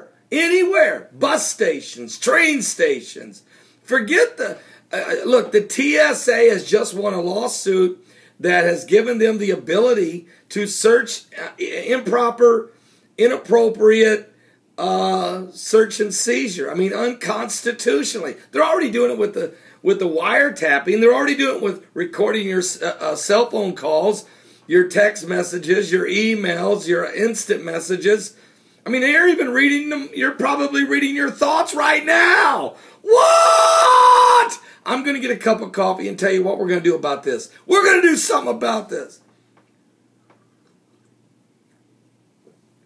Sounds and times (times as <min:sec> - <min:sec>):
Speech: 0:00.0 - 0:32.8, 0:34.2 - 0:39.2.